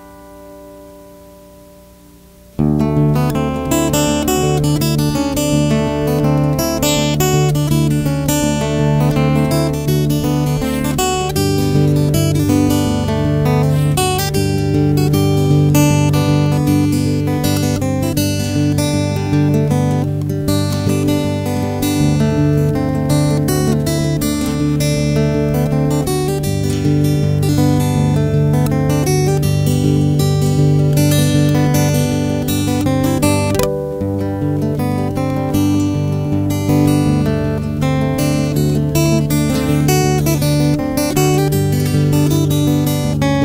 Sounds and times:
Acoustic guitar: 0:00.0 - 0:43.4
Strum: 0:00.0 - 0:43.4.

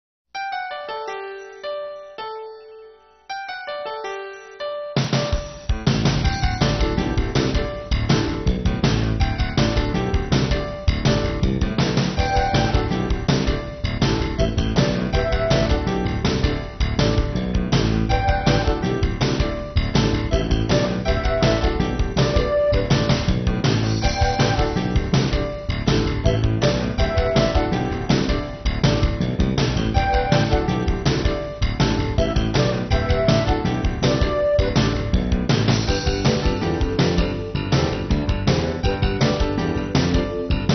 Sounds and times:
Music: 0:00.4 - 0:40.7.

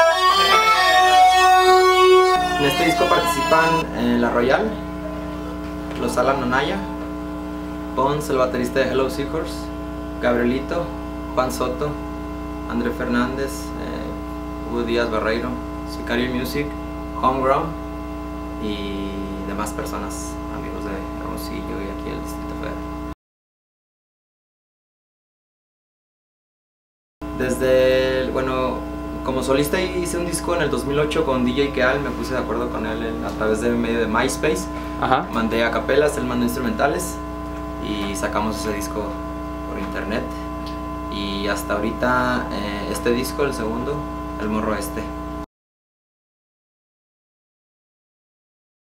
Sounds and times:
Speech: 0:02.5 - 0:04.9, 0:06.0 - 0:07.0, 0:08.0 - 0:12.0, 0:12.7 - 0:17.8, 0:18.6 - 0:22.8, 0:27.4 - 0:37.2, 0:37.8 - 0:40.5, 0:41.1 - 0:45.2.

